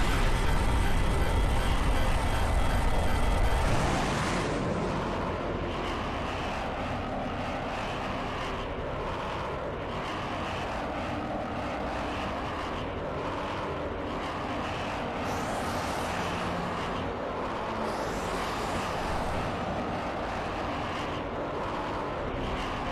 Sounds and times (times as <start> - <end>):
Fixed-wing aircraft, airplane: 0.0 - 22.9.